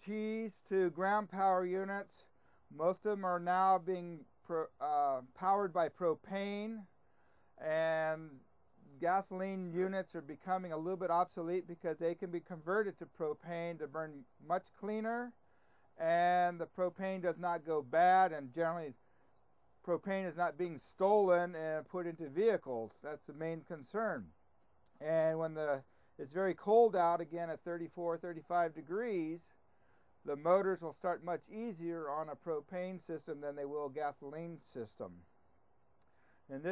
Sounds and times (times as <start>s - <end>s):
Speech: 0.0s - 6.9s, 7.6s - 15.4s, 16.0s - 19.0s, 19.9s - 24.3s, 25.0s - 29.6s, 30.3s - 35.3s, 36.5s - 36.7s.